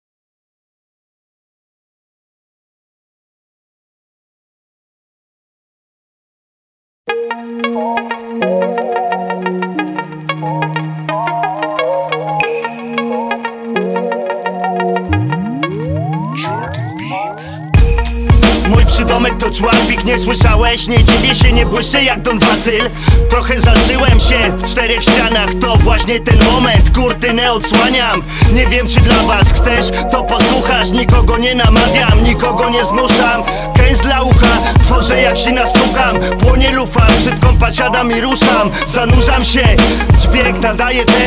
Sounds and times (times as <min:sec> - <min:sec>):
Music: 0:07.1 - 0:41.2.